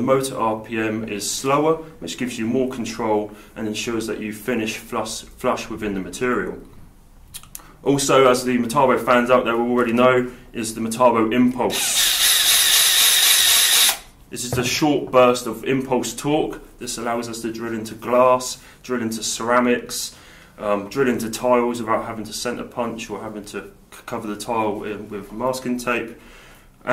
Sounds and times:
Speech: 0:00.0 - 0:06.7, 0:07.8 - 0:11.8, 0:14.3 - 0:26.2
Inside, small room: 0:00.0 - 0:26.9
Drill: 0:11.7 - 0:14.1.

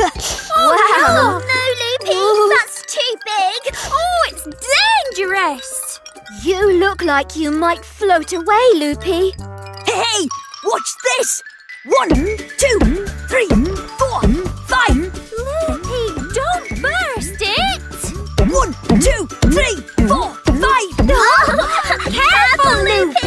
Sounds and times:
Music: 0:00.0 - 0:23.2
Speech: 0:09.9 - 0:17.8, 0:22.1 - 0:23.2.

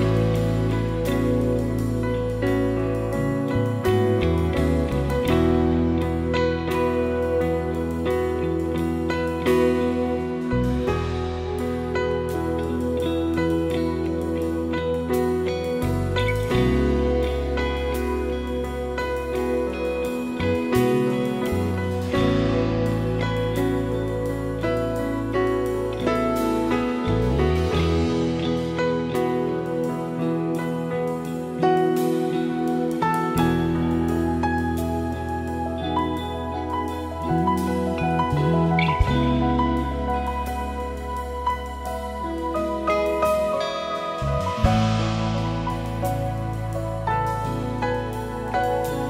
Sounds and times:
Christian music: 0:00.0 - 0:49.0
Tender music: 0:00.0 - 0:49.0.

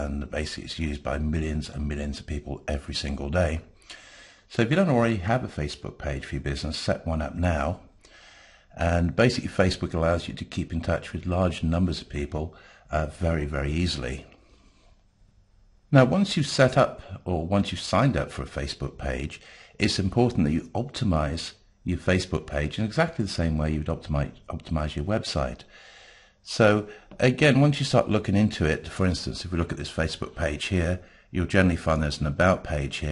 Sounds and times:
Speech: 0:00.0 - 0:03.7, 0:04.5 - 0:07.9, 0:08.8 - 0:14.4, 0:15.9 - 0:25.7, 0:26.4 - 0:33.1.

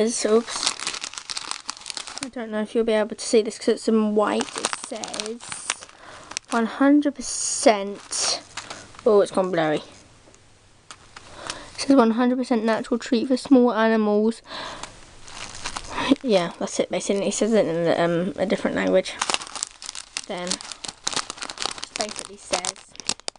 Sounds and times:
Speech: 0:00.0 - 0:00.8, 0:02.2 - 0:05.8, 0:06.6 - 0:08.4, 0:09.0 - 0:09.9, 0:11.8 - 0:14.4, 0:16.0 - 0:19.2, 0:20.3 - 0:20.6, 0:22.0 - 0:22.8.

